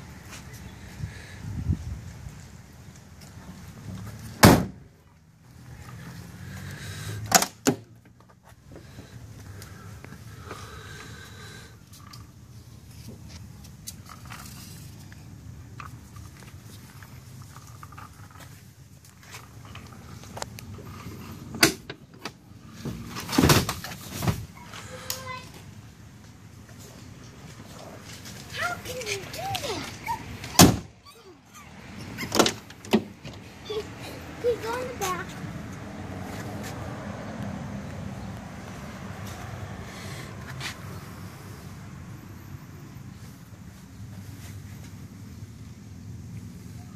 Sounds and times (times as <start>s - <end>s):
Vehicle: 0.0s - 46.9s
Door: 4.4s - 4.8s, 32.2s - 33.1s.